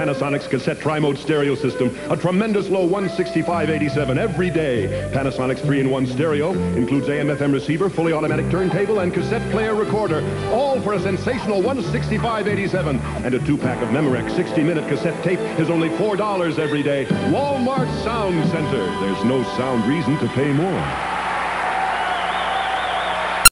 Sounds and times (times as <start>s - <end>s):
Speech: 0.0s - 21.0s
Music: 0.0s - 23.5s.